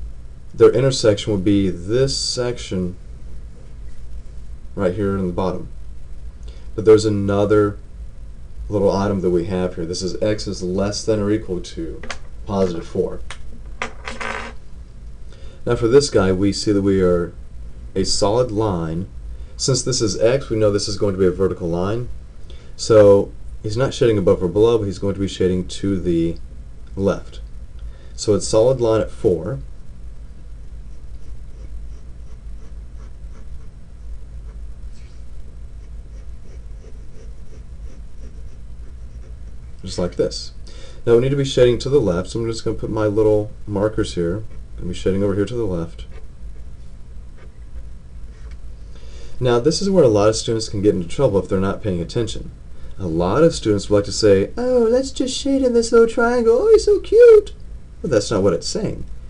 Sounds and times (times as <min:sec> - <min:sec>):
Speech: 0:00.6 - 0:03.0, 0:04.8 - 0:05.7, 0:06.8 - 0:07.8, 0:08.7 - 0:13.3, 0:15.7 - 0:17.4, 0:18.0 - 0:22.1, 0:22.8 - 0:26.4, 0:27.0 - 0:27.4, 0:28.2 - 0:29.7, 0:39.8 - 0:46.2, 0:49.4 - 0:59.1
Writing: 0:30.9 - 0:33.7, 0:35.8 - 0:39.6.